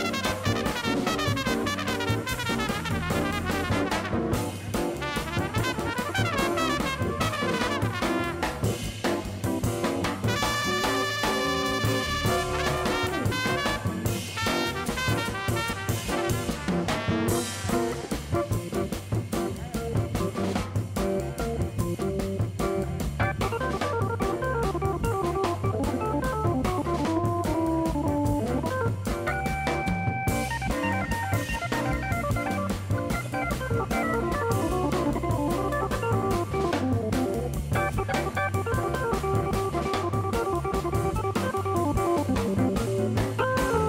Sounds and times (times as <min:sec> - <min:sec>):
Jazz: 0:00.0 - 0:43.8.